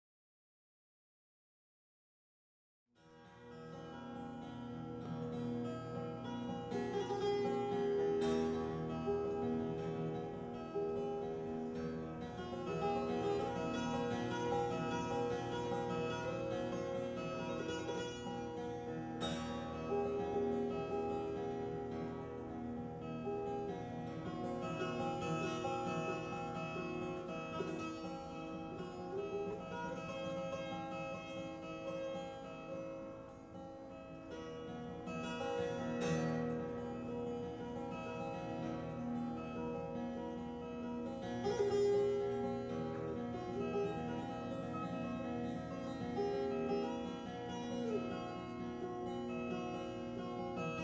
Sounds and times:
Music: 3.0s - 50.8s.

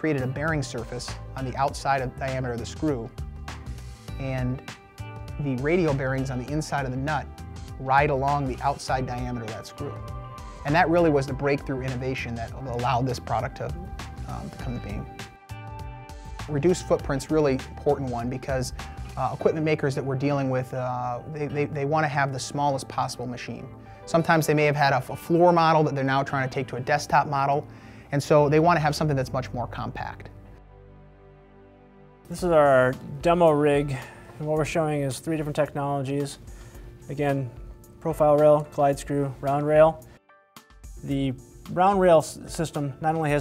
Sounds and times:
Speech: 0.0s - 3.1s, 4.2s - 4.6s, 10.7s - 15.1s, 16.5s - 30.3s, 32.3s - 36.4s, 37.1s - 40.0s, 41.1s - 43.4s
Music: 0.0s - 43.4s.

